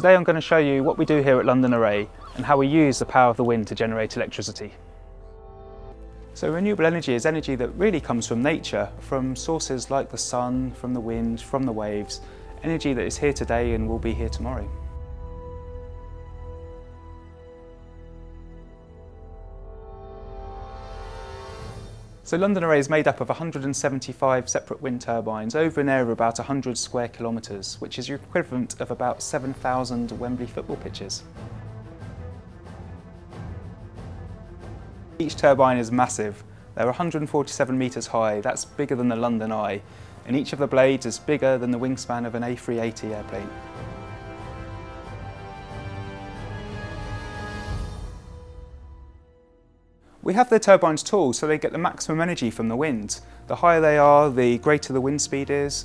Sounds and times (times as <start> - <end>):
Speech: 0.0 - 4.8, 6.4 - 14.8, 22.3 - 31.3, 35.2 - 43.5, 50.2 - 55.8.